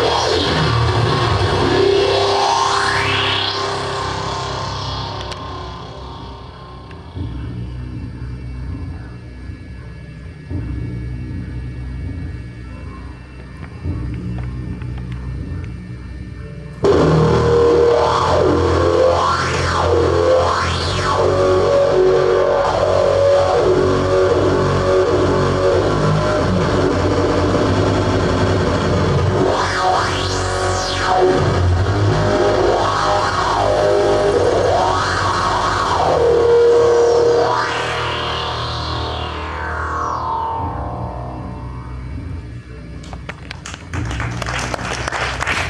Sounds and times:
Music: 0:00.0 - 0:45.6.

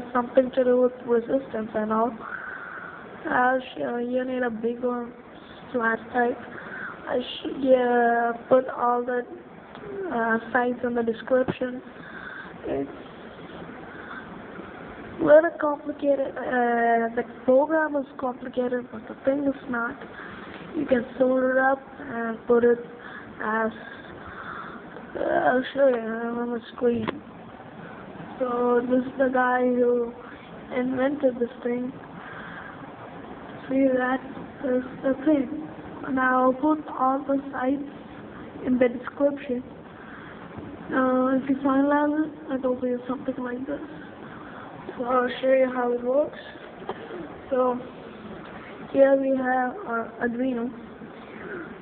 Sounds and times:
Speech: 0:00.0 - 0:02.3, 0:03.2 - 0:06.5, 0:07.1 - 0:11.9, 0:12.6 - 0:13.1, 0:15.2 - 0:20.1, 0:20.7 - 0:24.1, 0:25.0 - 0:27.2, 0:28.4 - 0:32.0, 0:33.6 - 0:37.9, 0:38.6 - 0:39.7, 0:40.9 - 0:44.0, 0:45.0 - 0:46.7, 0:47.5 - 0:47.9, 0:48.9 - 0:50.8.

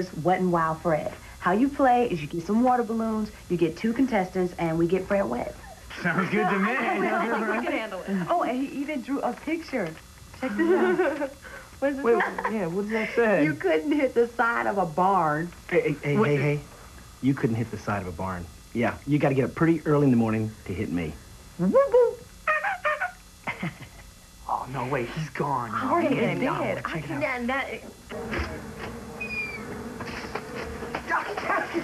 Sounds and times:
Speech: 0:14.8 - 0:16.6, 0:17.2 - 0:21.2, 0:24.5 - 0:27.8.

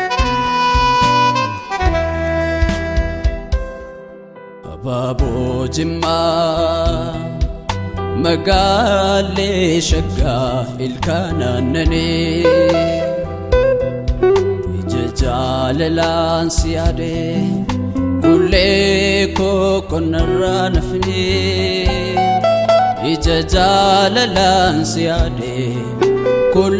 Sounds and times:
Music: 0:00.0 - 0:26.7.

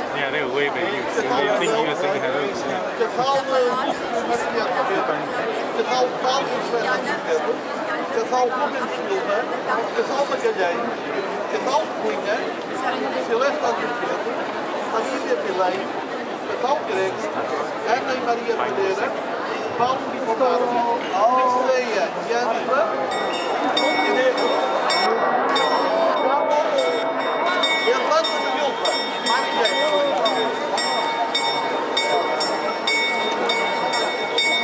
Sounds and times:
Speech: 0:00.0 - 0:34.6.

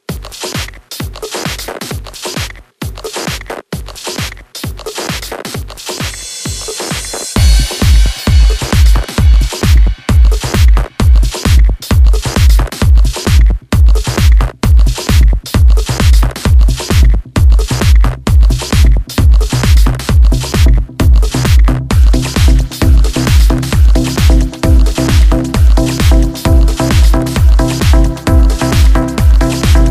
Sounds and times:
Music: 0:00.0 - 0:29.9.

